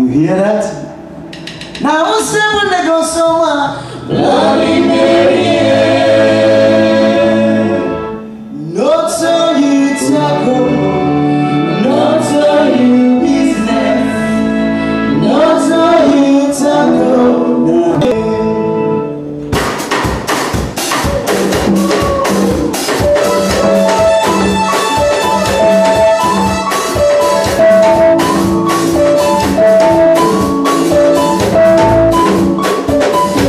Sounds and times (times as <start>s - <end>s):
Music: 0.6s - 2.7s, 3.7s - 33.4s.